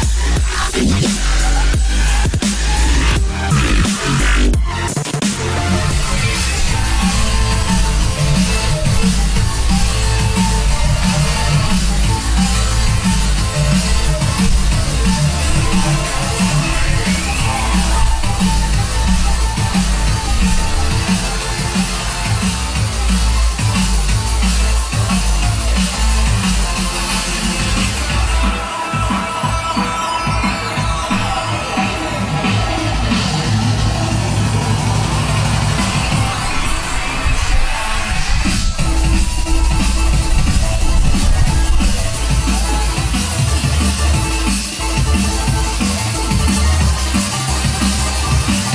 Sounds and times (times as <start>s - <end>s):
Drum kit: 0.0s - 48.7s
Dubstep: 0.0s - 48.7s.